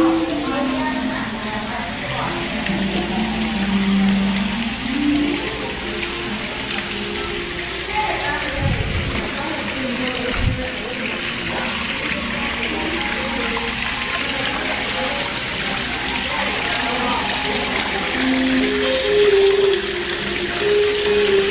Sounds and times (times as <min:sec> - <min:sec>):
Speech: 0:00.0 - 0:03.5, 0:06.6 - 0:19.6
Music: 0:00.0 - 0:09.6, 0:11.2 - 0:21.5
Water: 0:00.0 - 0:21.5.